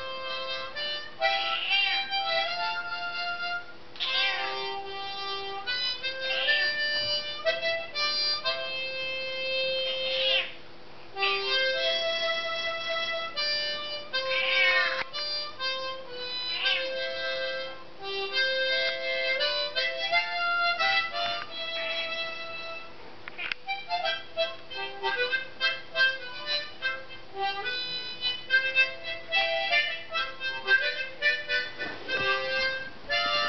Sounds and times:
Music: 0.0s - 10.6s, 11.2s - 23.0s, 23.6s - 33.4s
Meow: 1.4s - 2.1s, 4.0s - 4.8s, 6.3s - 6.8s, 10.1s - 10.6s, 14.2s - 15.1s, 16.4s - 17.0s.

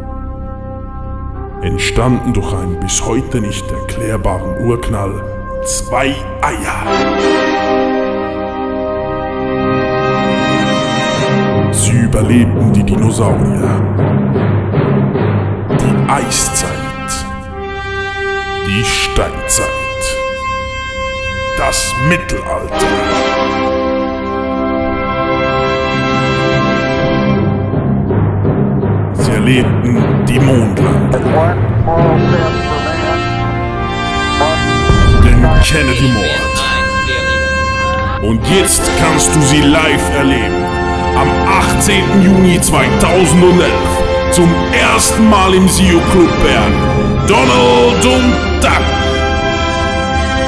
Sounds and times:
Music: 0.0s - 50.4s
Speech: 1.6s - 7.1s, 11.7s - 13.9s, 15.8s - 17.3s, 18.6s - 20.2s, 21.6s - 23.2s, 29.2s - 33.3s, 34.4s - 37.4s, 38.2s - 40.6s, 41.2s - 49.1s.

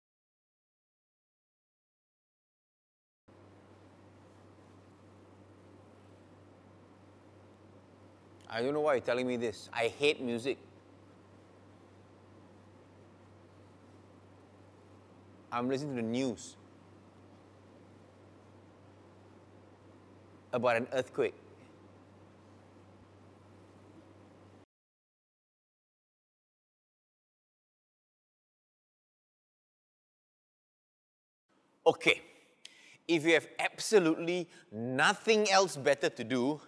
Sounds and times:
Speech: 8.5s - 10.7s, 15.5s - 16.6s, 20.5s - 21.4s, 31.9s - 32.3s, 33.1s - 36.6s.

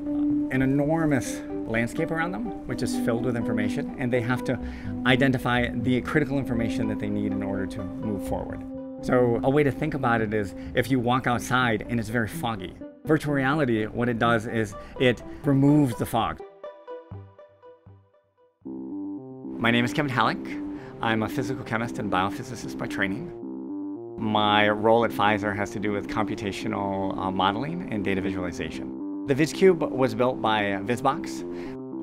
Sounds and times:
Music: 0.0s - 32.0s
Speech: 0.5s - 16.4s, 19.6s - 23.3s, 24.2s - 31.5s.

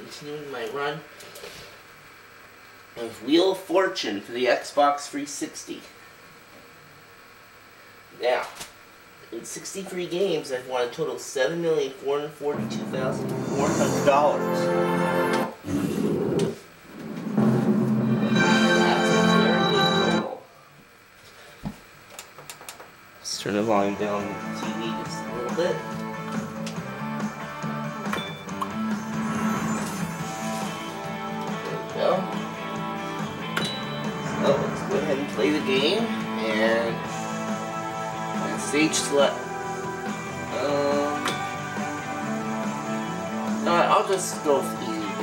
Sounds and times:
Speech: 0.0s - 1.1s, 3.0s - 6.0s, 8.1s - 8.6s, 9.2s - 14.8s, 23.2s - 25.9s, 31.9s - 32.3s, 34.4s - 37.0s, 38.4s - 39.4s, 40.5s - 41.2s, 43.6s - 45.2s
Music: 12.5s - 15.6s, 17.0s - 20.4s, 23.4s - 45.2s.

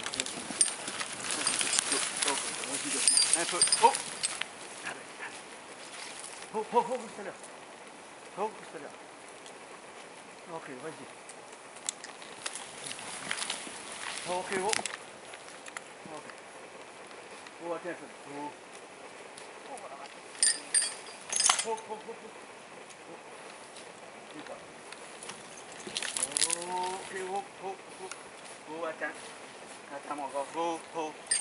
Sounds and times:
Speech: 2.2s - 4.0s, 8.4s - 9.0s, 10.5s - 11.1s, 14.3s - 14.9s, 17.6s - 18.6s, 19.6s - 20.1s, 24.3s - 24.6s, 26.2s - 29.3s, 29.9s - 31.2s.

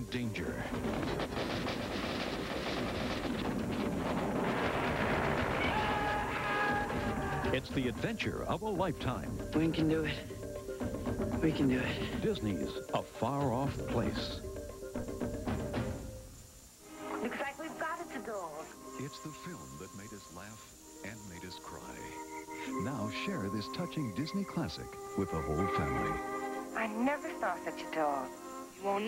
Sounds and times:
Music: 0.0s - 1.9s, 5.2s - 29.0s
Speech: 7.5s - 10.2s, 11.4s - 14.4s, 17.2s - 26.2s.

